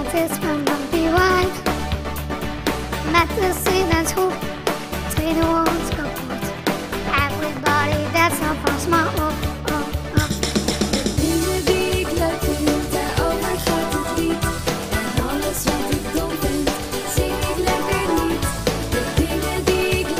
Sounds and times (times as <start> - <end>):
Music: 0.0 - 20.1.